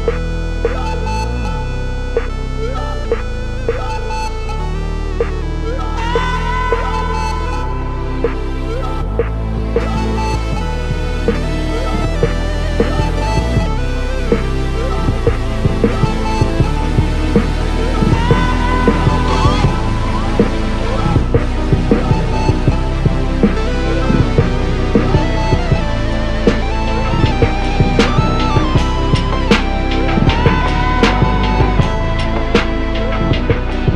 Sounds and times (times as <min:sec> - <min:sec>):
Music: 0:00.0 - 0:33.9.